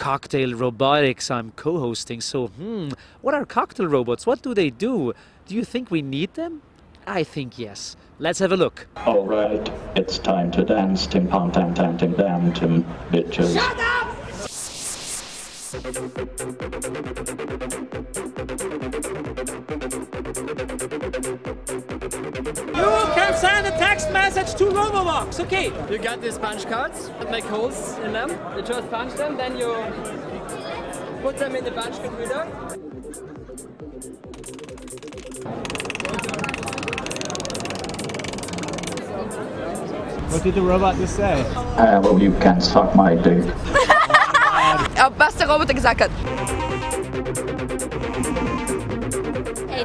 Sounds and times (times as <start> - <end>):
Music: 15.8 - 40.1, 45.2 - 49.8.